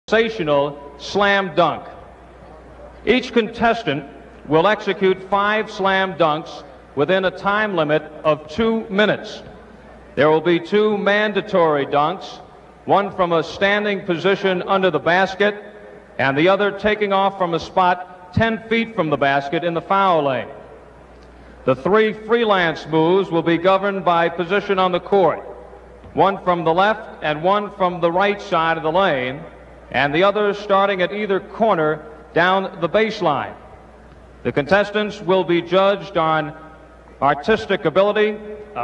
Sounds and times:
Narration, monologue: 0.0s - 38.8s.

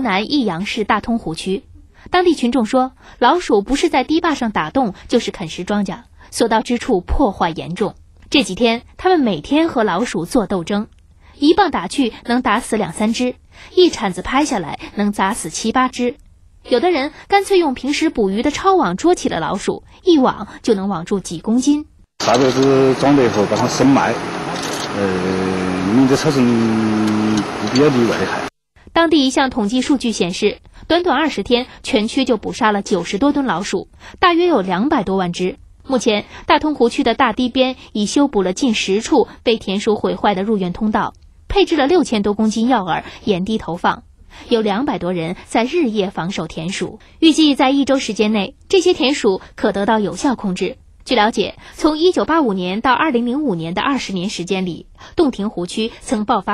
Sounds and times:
Speech: 0.0s - 24.2s, 24.9s - 56.5s.

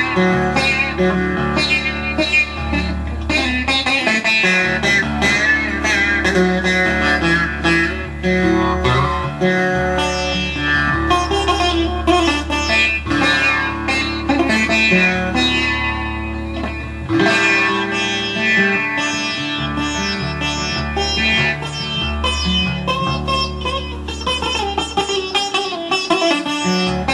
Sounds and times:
Music: 0.0s - 27.1s.

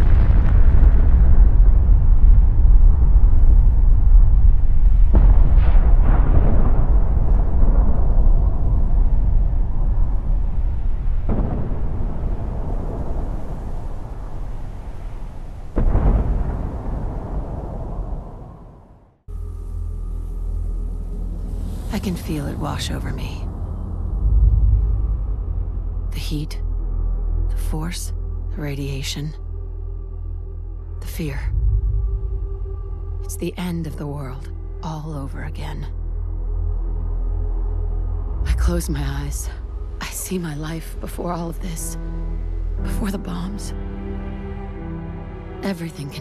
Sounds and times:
Explosion: 0.0s - 19.3s.

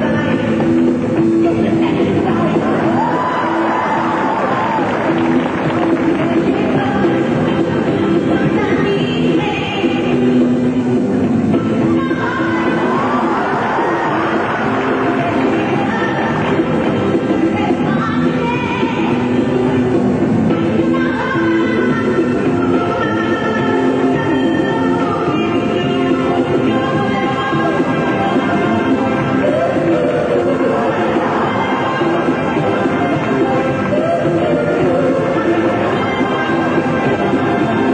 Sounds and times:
Music: 0.0s - 37.9s.

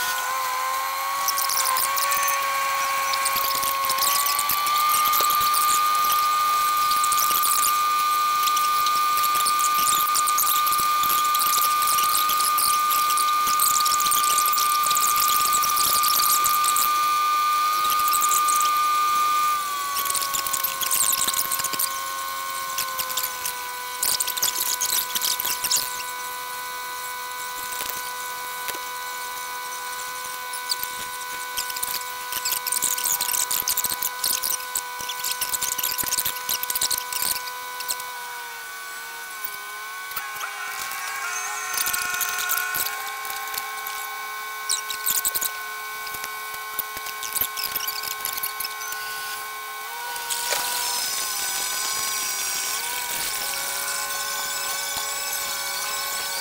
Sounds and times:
Outside, rural or natural: 0.0s - 56.4s.

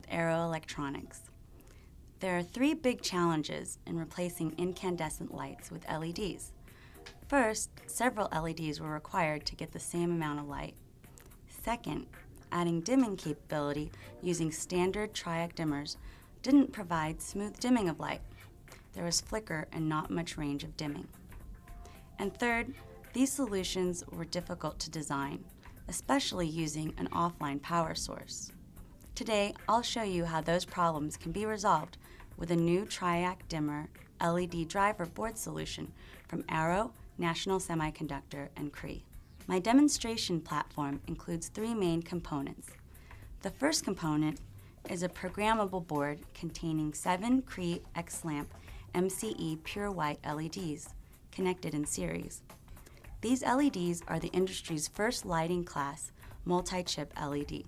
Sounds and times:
Speech: 0.0s - 1.3s, 2.2s - 6.5s, 7.3s - 10.8s, 11.5s - 18.3s, 18.9s - 21.2s, 22.2s - 28.5s, 29.1s - 42.8s, 43.4s - 52.4s, 53.2s - 57.6s.

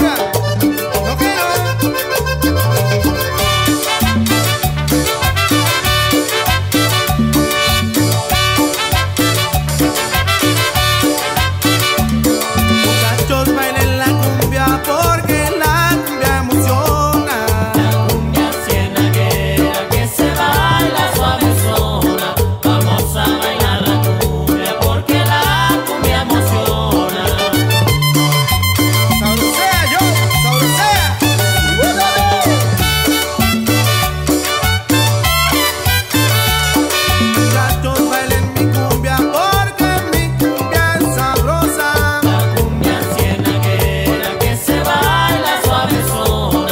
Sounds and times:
Salsa music: 0.0s - 46.7s.

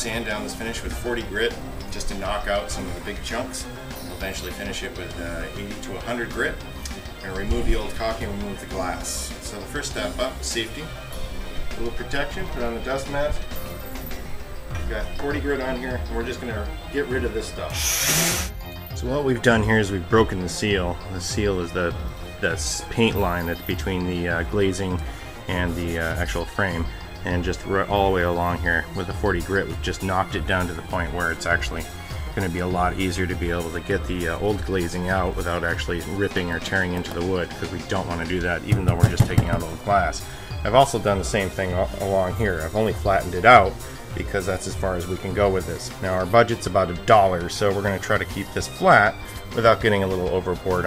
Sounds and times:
Speech: 0.0s - 6.6s, 7.2s - 10.9s, 11.7s - 13.4s, 14.7s - 17.8s, 19.0s - 50.8s
Music: 0.0s - 50.8s.

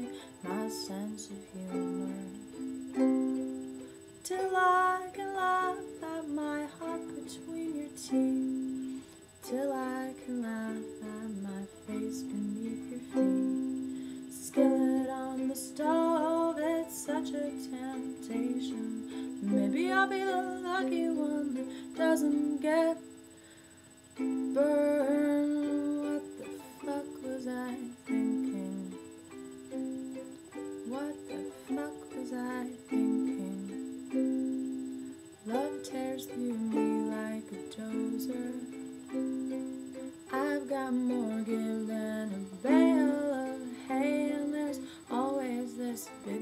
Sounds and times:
Ukulele: 0.0s - 23.2s, 24.2s - 46.4s
Inside, small room: 0.0s - 46.4s.

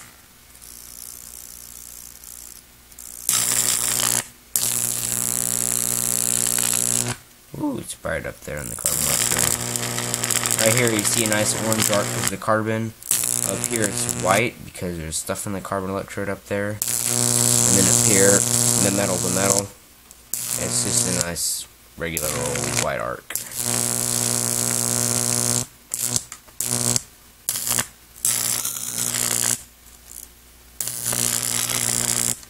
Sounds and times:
Hum: 0.0s - 32.4s
Mains hum: 0.0s - 32.4s.

